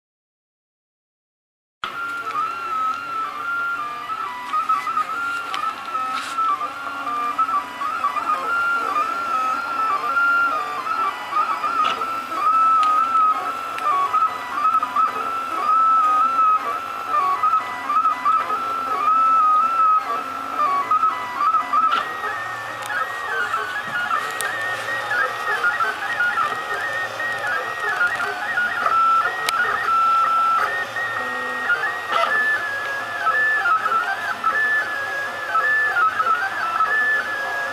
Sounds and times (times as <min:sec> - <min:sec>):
Printer: 0:01.8 - 0:37.7.